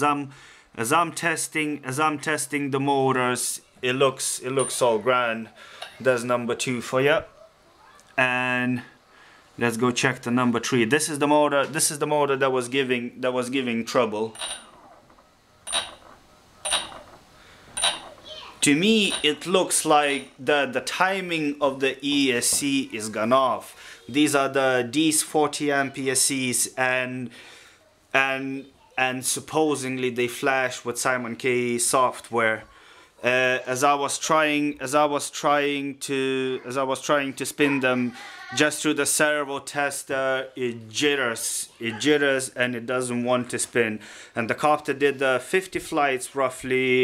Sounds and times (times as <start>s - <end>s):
Speech: 0.0s - 7.3s, 7.9s - 9.0s, 9.6s - 14.4s, 18.3s - 27.3s, 28.2s - 47.0s.